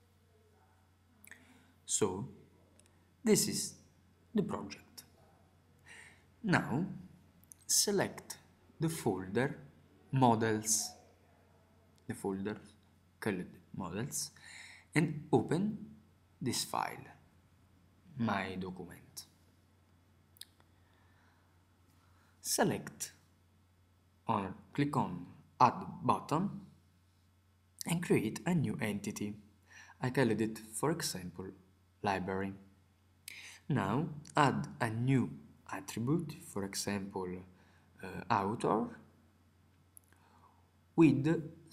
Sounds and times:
Speech: 0.0 - 5.5, 6.4 - 17.2, 18.1 - 19.4, 22.4 - 23.2, 24.3 - 26.8, 27.8 - 32.7, 33.3 - 39.1, 41.0 - 41.7.

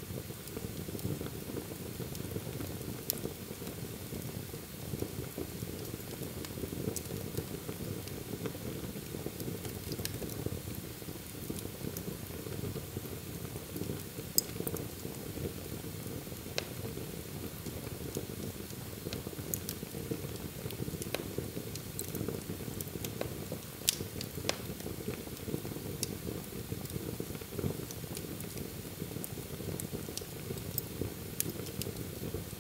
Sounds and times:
Fire: 0.0 - 32.6.

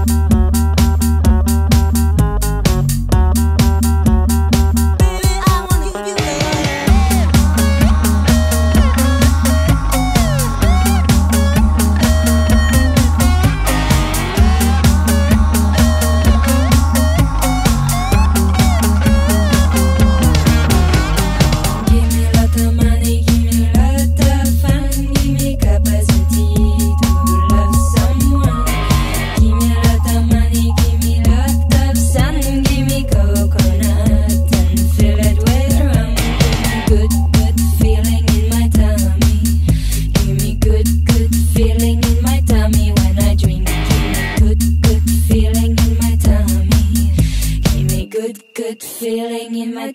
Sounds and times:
Disco: 0.0 - 48.0.

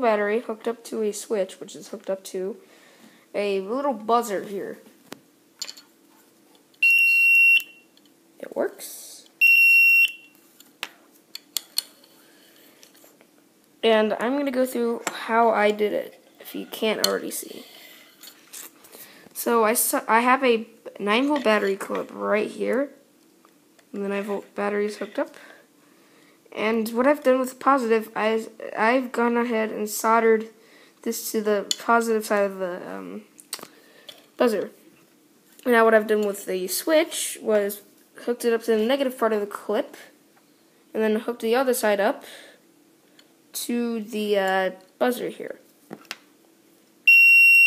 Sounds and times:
Speech: 0.0 - 2.6, 3.3 - 4.9, 8.4 - 9.3, 13.8 - 17.8, 19.4 - 23.0, 23.9 - 25.6, 26.5 - 33.3, 34.4 - 34.8, 35.6 - 40.2, 40.9 - 42.5, 43.6 - 45.7.

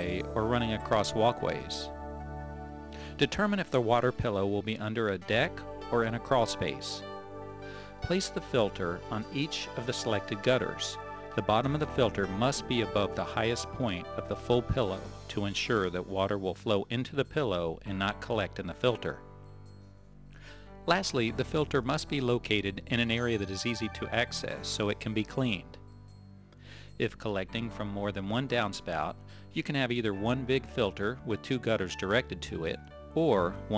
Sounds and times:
Speech: 0.0 - 1.9, 3.2 - 7.0, 8.0 - 19.2, 20.9 - 25.8, 27.0 - 33.7
Music: 0.0 - 33.7.

